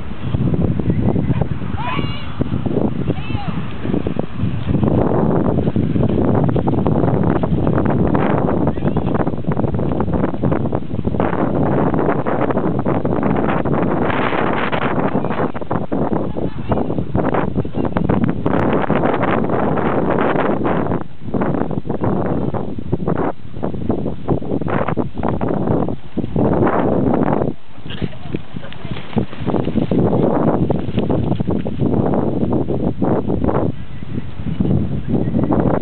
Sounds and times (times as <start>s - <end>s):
Speech: 3.1s - 3.6s, 16.2s - 17.0s, 27.9s - 29.1s.